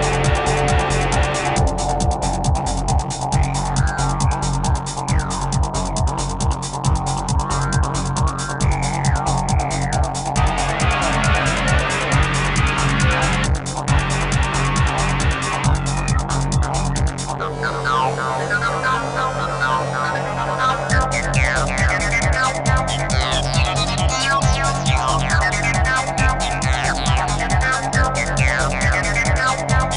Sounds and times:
Exciting music: 0.0s - 29.9s
Soundtrack music: 0.0s - 29.9s.

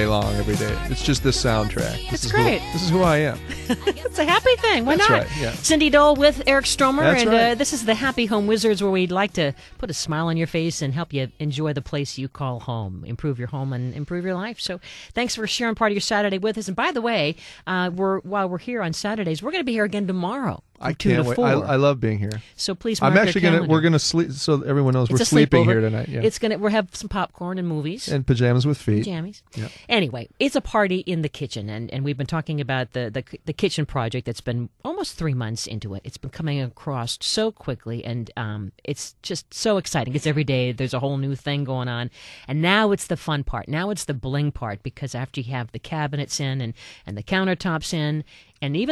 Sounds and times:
Speech: 0.0s - 48.9s.

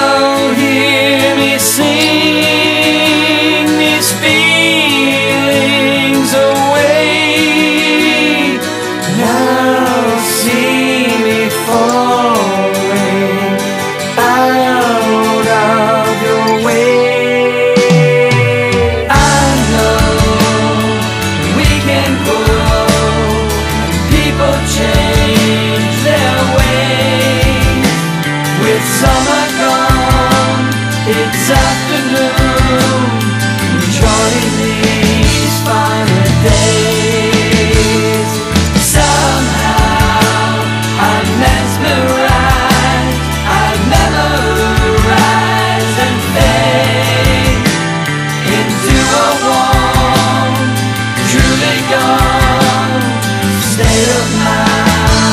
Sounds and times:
Heavy metal: 0.0s - 55.3s.

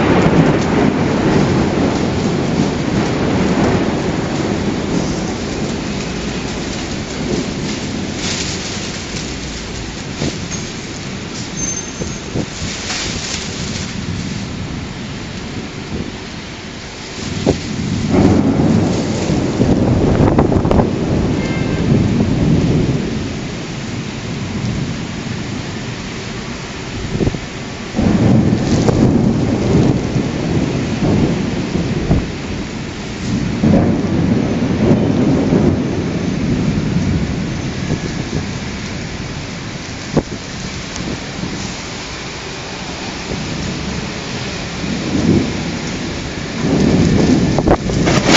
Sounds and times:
Thunder: 0.0s - 16.3s, 17.0s - 48.3s
Rain: 0.0s - 48.3s.

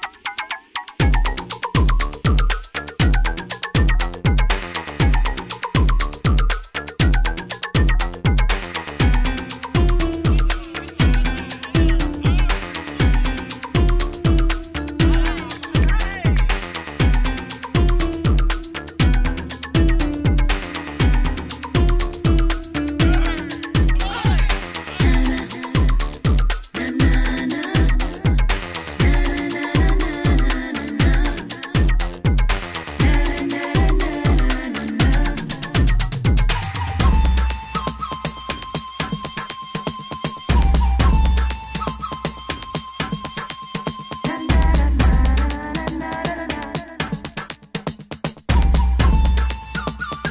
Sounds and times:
Disco: 1.0s - 36.8s.

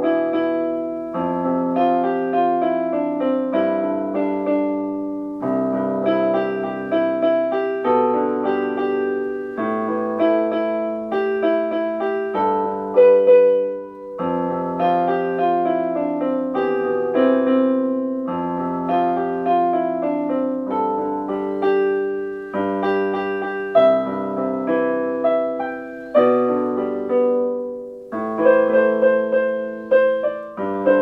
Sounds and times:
Electric piano: 0.0s - 31.0s.

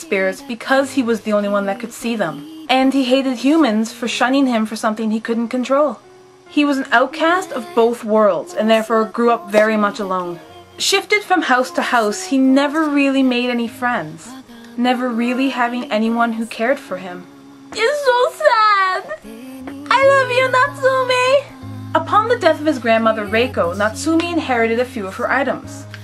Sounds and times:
Speech: 0.0s - 6.0s, 6.6s - 19.2s, 19.9s - 25.8s
Inside, small room: 0.0s - 26.0s
Music: 0.0s - 26.0s.

